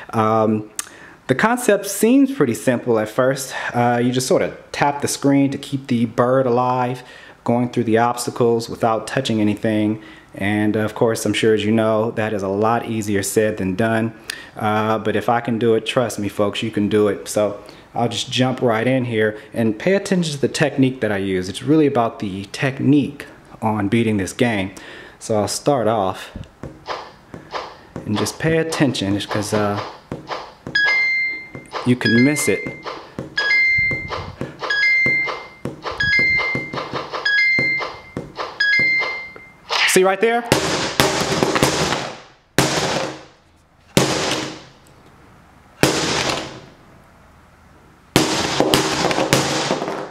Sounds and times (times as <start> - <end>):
Speech: 0.1 - 26.4, 28.0 - 29.8, 31.8 - 32.7, 39.8 - 40.5.